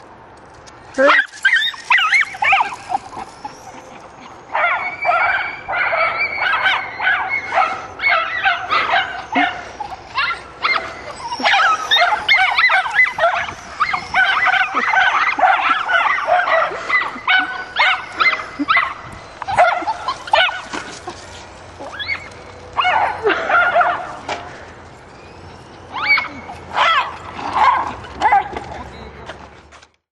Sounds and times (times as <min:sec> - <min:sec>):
Dog: 0:01.0 - 0:20.8, 0:26.0 - 0:28.9.